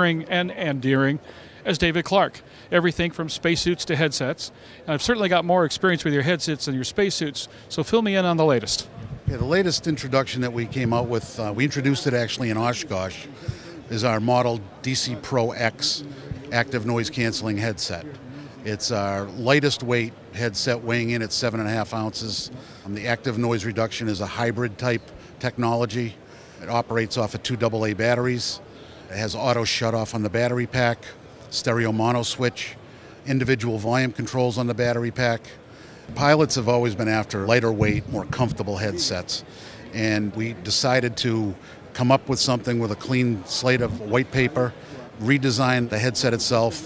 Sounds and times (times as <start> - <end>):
Speech: 0.0 - 46.8.